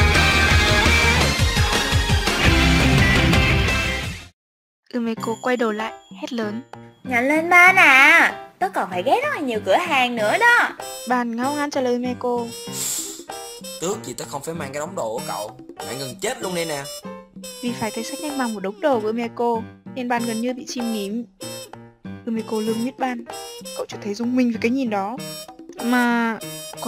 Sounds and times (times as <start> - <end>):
Music: 0.0 - 4.3, 4.9 - 26.8
Speech: 4.9 - 12.5, 13.8 - 16.9, 17.6 - 21.3, 22.3 - 23.2, 23.8 - 25.2, 25.8 - 26.8.